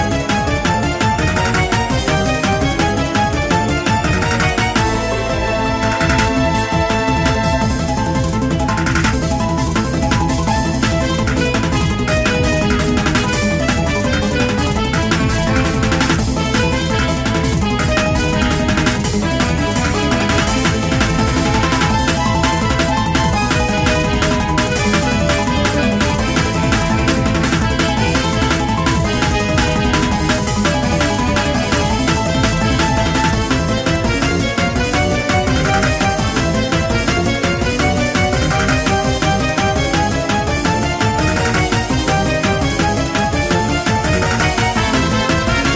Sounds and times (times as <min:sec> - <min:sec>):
Music: 0:00.0 - 0:45.7.